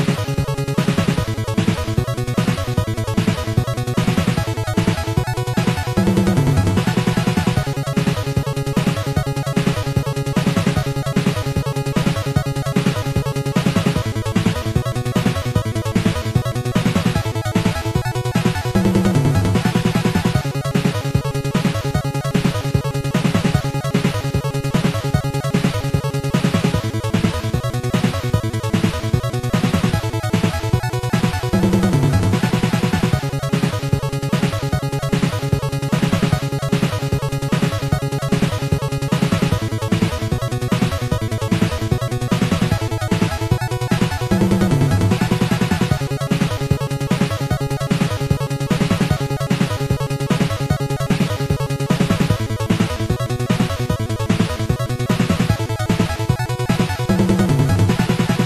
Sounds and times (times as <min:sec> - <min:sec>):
Video game music: 0:00.0 - 0:58.4.